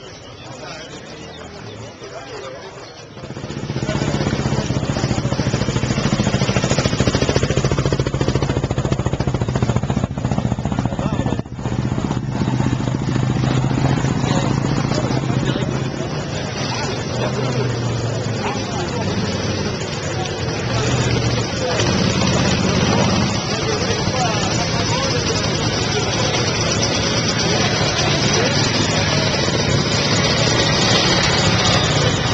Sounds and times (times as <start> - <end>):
Speech: 0.0 - 5.7, 10.4 - 12.2, 13.5 - 30.3
Motorcycle: 0.0 - 32.3
Outside, rural or natural: 0.0 - 32.3.